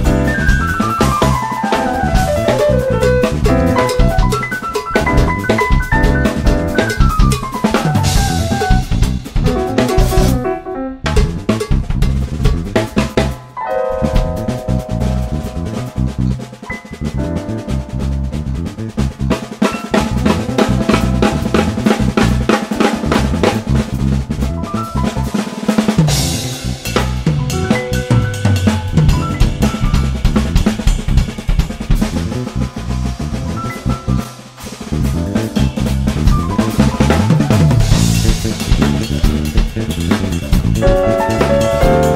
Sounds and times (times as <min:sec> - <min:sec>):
Snare drum: 0:00.0 - 0:10.4, 0:19.3 - 0:24.1, 0:33.6 - 0:42.1
Drum kit: 0:00.0 - 0:42.1
Guitar: 0:00.0 - 0:42.1
Cymbal: 0:25.0 - 0:42.1.